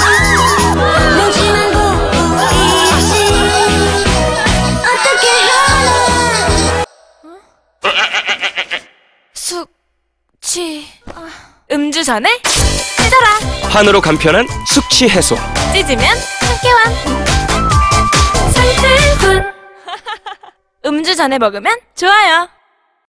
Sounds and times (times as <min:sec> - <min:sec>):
Music: 0:00.0 - 0:06.9, 0:12.5 - 0:19.9.